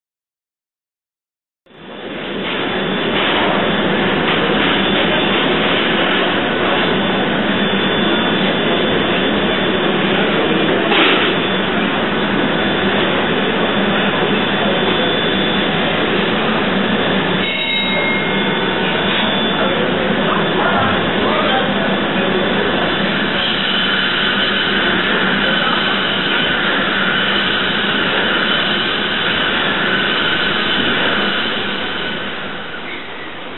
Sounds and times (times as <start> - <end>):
Speech: 13.8 - 16.6, 17.7 - 27.2.